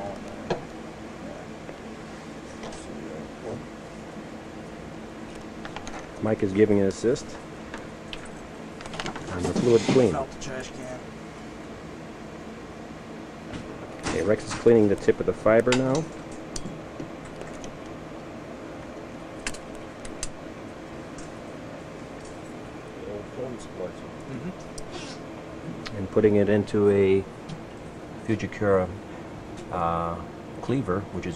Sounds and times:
Speech: 0.0 - 0.5, 1.2 - 1.5, 2.6 - 3.6, 6.2 - 7.4, 9.3 - 11.0, 14.1 - 16.1, 23.0 - 24.6, 25.9 - 27.3, 28.3 - 29.0, 29.7 - 31.3.

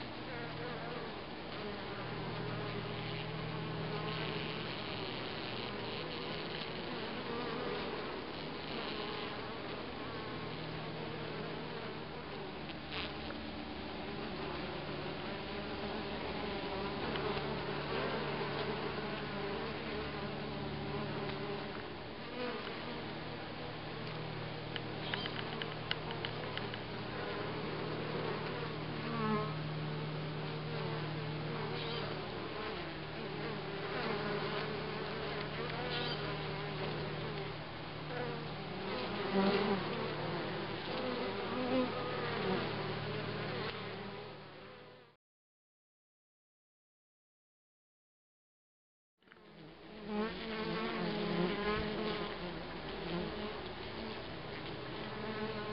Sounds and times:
Bee, wasp, etc.: 0.0 - 45.2, 49.3 - 55.7
Fly, housefly: 0.0 - 45.2, 49.2 - 55.7.

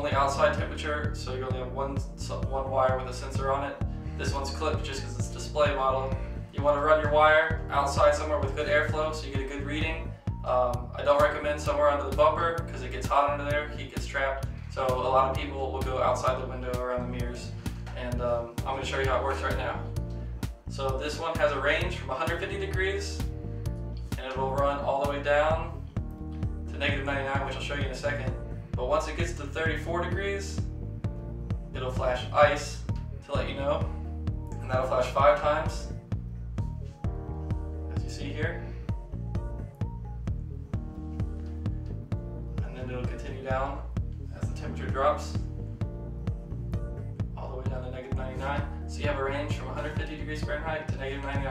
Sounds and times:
Speech: 0.0 - 20.0, 20.7 - 23.3, 24.2 - 25.8, 26.7 - 30.7, 31.8 - 34.0, 34.6 - 36.0, 37.9 - 38.8, 42.6 - 45.5, 47.4 - 51.5
Music: 0.0 - 51.5.

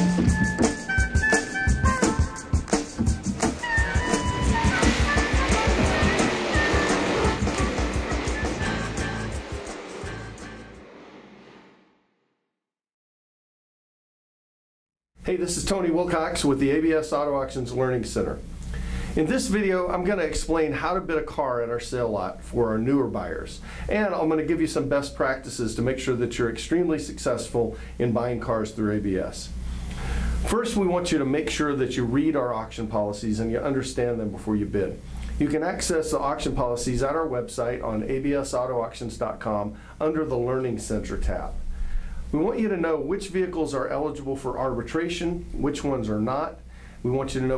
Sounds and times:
Speech: 15.2 - 18.4, 19.2 - 29.5, 30.5 - 41.6, 42.3 - 47.5.

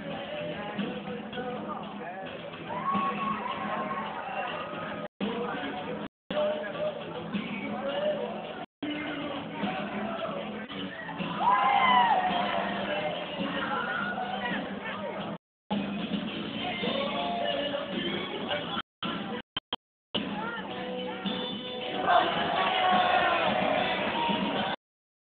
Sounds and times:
Inside, large room or hall: 0.0 - 15.3, 20.2 - 24.8
Music: 0.0 - 19.5, 20.2 - 24.8
Speech: 0.6 - 2.4, 5.2 - 11.2, 12.6 - 15.4, 20.2 - 23.4.

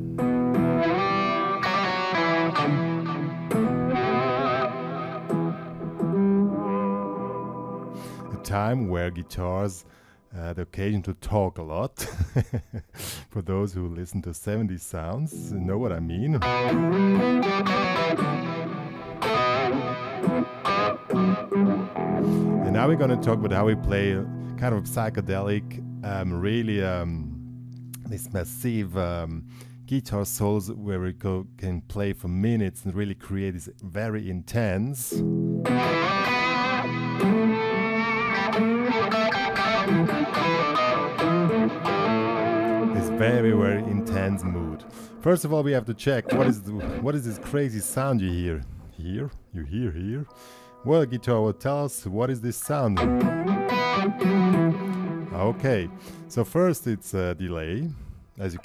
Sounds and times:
Psychedelic rock: 0.0 - 8.4, 16.4 - 23.5, 35.2 - 44.1, 53.0 - 56.3
Guitar: 0.0 - 10.1, 15.1 - 58.6
Speech: 8.3 - 12.0, 13.3 - 16.5, 22.6 - 27.4, 28.0 - 35.2, 43.0 - 53.1, 55.3 - 58.6.

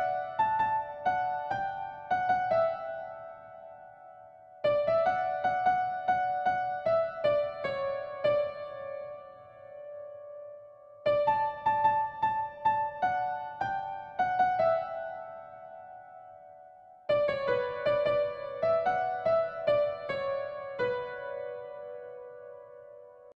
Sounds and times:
Music: 0.0 - 23.3.

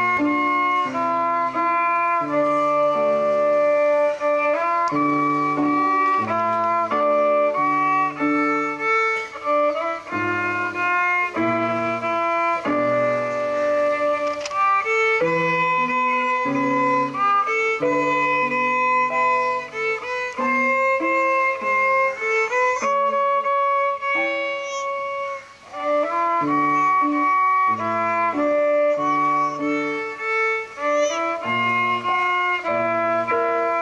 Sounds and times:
Violin, fiddle: 0.0 - 33.8.

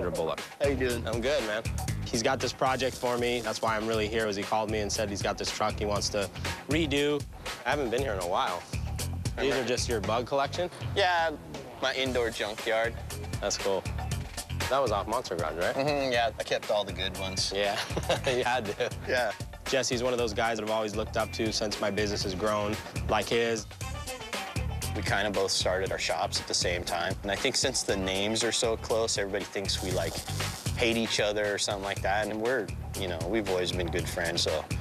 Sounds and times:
Speech: 0.0 - 8.7, 9.4 - 13.9, 14.7 - 23.7, 25.0 - 30.2, 30.8 - 34.8
Music: 0.0 - 34.8.

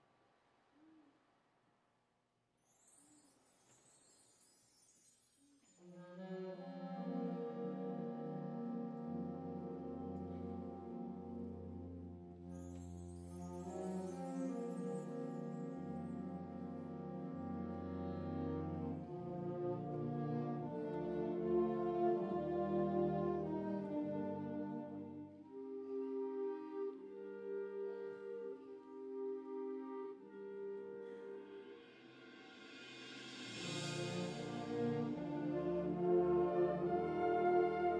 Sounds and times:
Music: 2.6 - 37.9.

